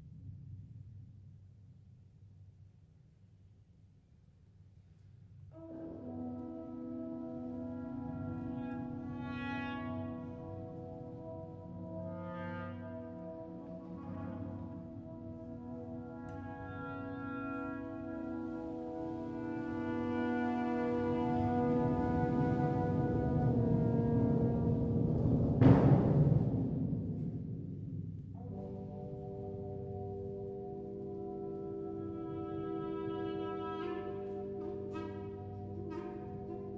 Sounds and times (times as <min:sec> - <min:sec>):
Clarinet: 0:05.6 - 0:25.1, 0:28.4 - 0:36.7.